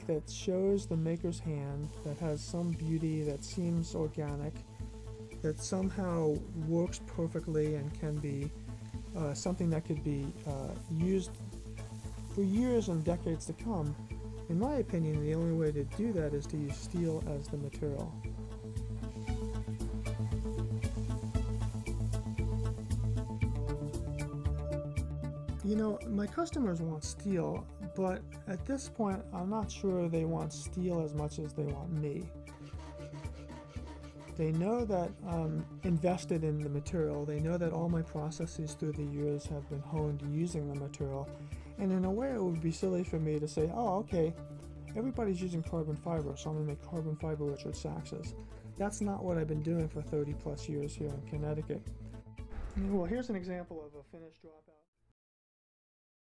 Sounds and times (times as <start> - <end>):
Speech: 0.0 - 4.6, 5.4 - 8.5, 9.2 - 11.4, 12.4 - 18.2, 25.6 - 32.3, 34.4 - 51.9, 52.8 - 54.9
Music: 0.0 - 54.9.